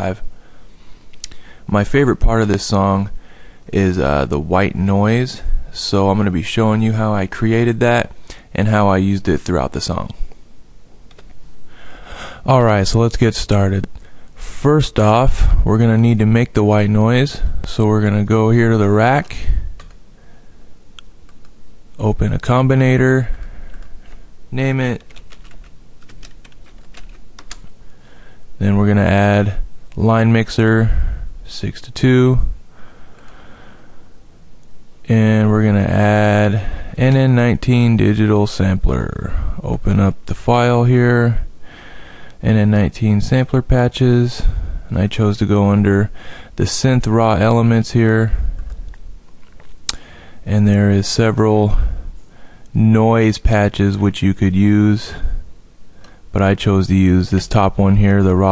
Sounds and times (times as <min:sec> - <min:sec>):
Speech: 0:00.0 - 0:00.2, 0:01.7 - 0:10.2, 0:12.4 - 0:19.6, 0:22.0 - 0:23.4, 0:24.5 - 0:25.1, 0:28.6 - 0:32.6, 0:35.1 - 0:41.5, 0:42.4 - 0:48.4, 0:50.5 - 0:52.0, 0:52.7 - 0:55.4, 0:56.3 - 0:58.5.